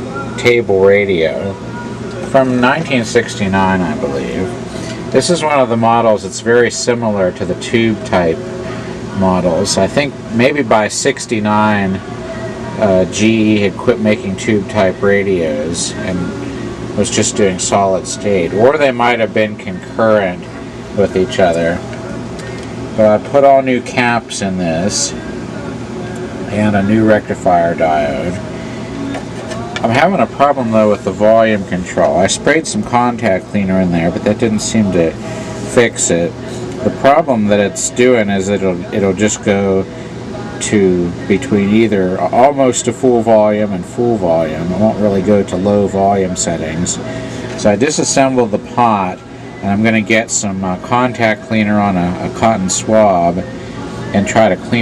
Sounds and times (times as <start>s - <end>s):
Speech: 0.0s - 22.0s, 23.0s - 28.5s, 29.5s - 54.8s.